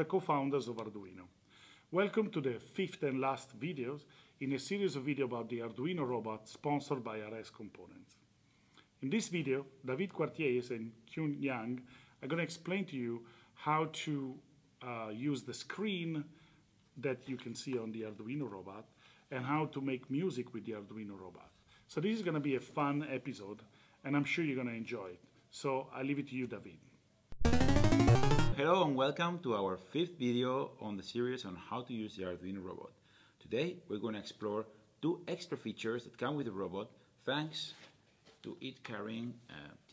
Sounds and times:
Speech: 0.0 - 8.2, 9.0 - 16.4, 17.0 - 26.9, 28.6 - 39.9.

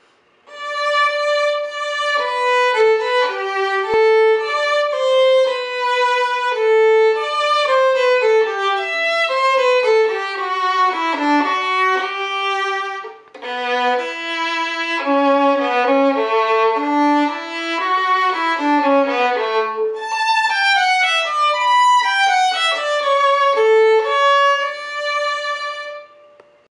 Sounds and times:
Violin, fiddle: 0.5 - 26.5.

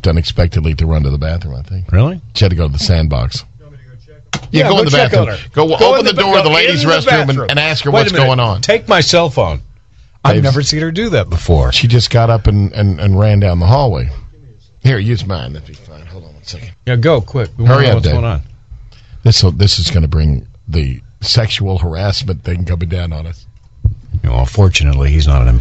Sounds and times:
Speech: 0.0 - 9.6, 10.2 - 18.5, 19.2 - 23.5, 24.2 - 25.6.

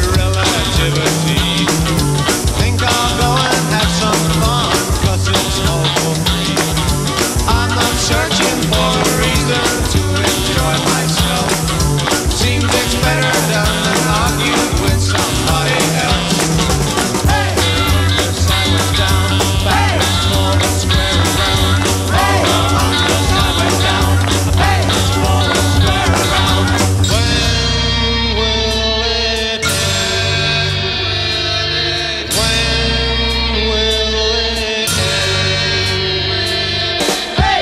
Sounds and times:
Music: 0.0 - 37.6.

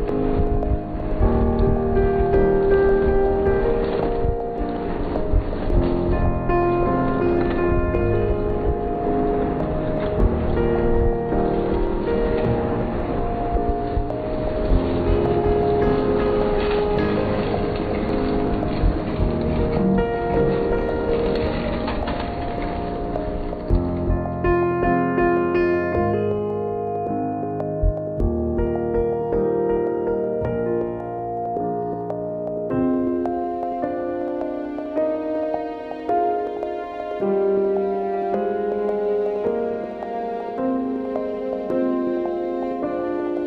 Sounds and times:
Music: 0.0 - 43.4.

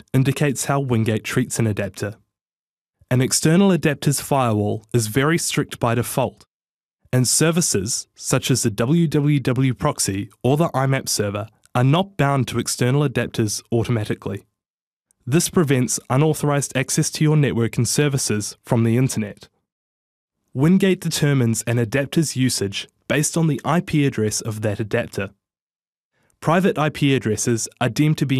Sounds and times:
Speech synthesizer: 0.0 - 2.2, 3.1 - 6.4, 7.2 - 14.4, 15.3 - 19.5, 20.6 - 25.3, 26.4 - 28.3.

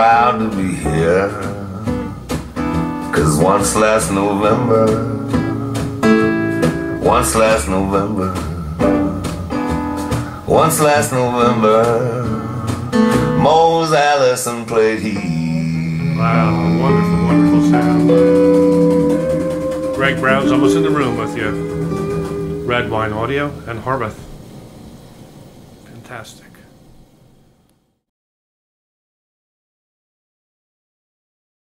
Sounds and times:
Music: 0.0 - 24.1
Speech: 20.0 - 21.6, 22.7 - 24.2, 25.9 - 26.7.

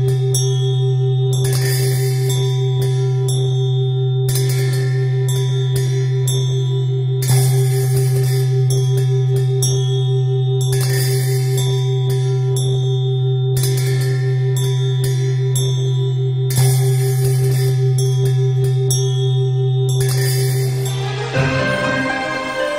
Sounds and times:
Music: 0.0 - 22.7.

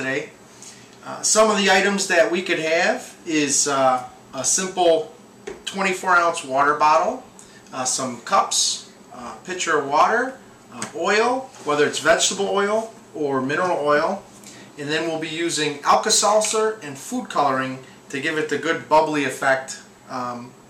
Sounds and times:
Speech: 0.0 - 0.4, 1.0 - 20.6.

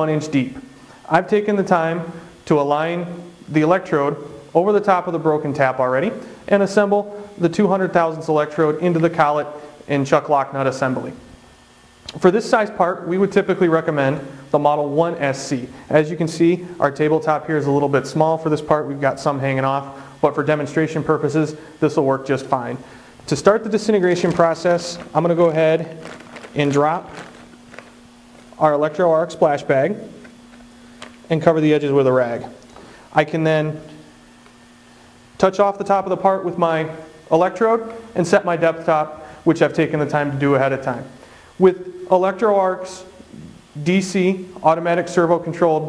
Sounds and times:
Speech: 0.0 - 11.2, 12.1 - 26.0, 26.6 - 27.3, 28.6 - 30.2, 31.3 - 32.6, 33.2 - 33.9, 35.4 - 45.8.

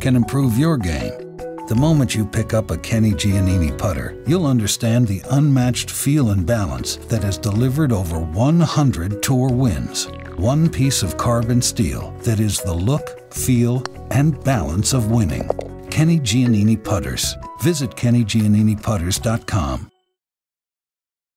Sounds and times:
Speech: 0.0 - 19.9
Music: 0.0 - 20.2.

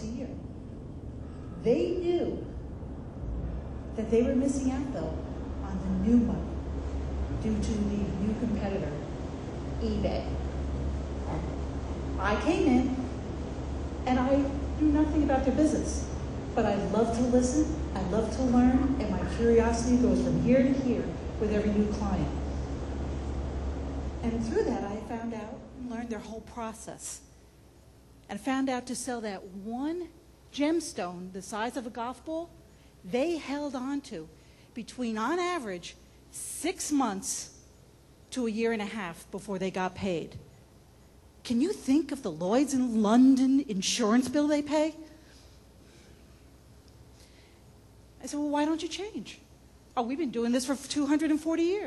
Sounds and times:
Female speech, woman speaking: 0.0 - 0.4, 1.6 - 2.5, 4.0 - 6.6, 7.4 - 9.1, 9.8 - 10.4, 12.2 - 13.1, 14.1 - 22.6, 24.2 - 27.3, 28.3 - 37.6, 38.3 - 40.4, 41.4 - 45.1, 48.2 - 51.8.

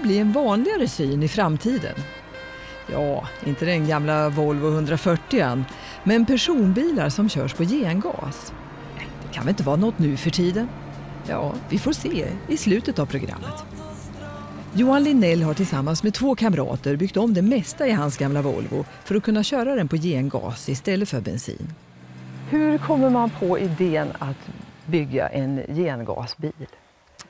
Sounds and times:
Speech: 0.0 - 2.0, 2.9 - 10.7, 11.3 - 13.6, 14.8 - 21.8, 22.5 - 26.8
Music: 0.0 - 21.0.

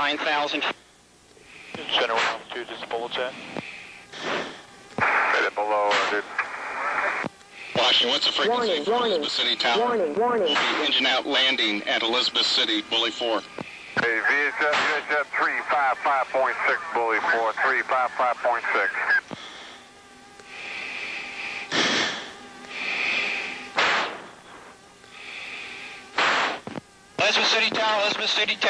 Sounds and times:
Speech: 1.8 - 3.4, 5.4 - 6.3, 7.8 - 13.4, 14.0 - 19.0, 27.2 - 28.7.

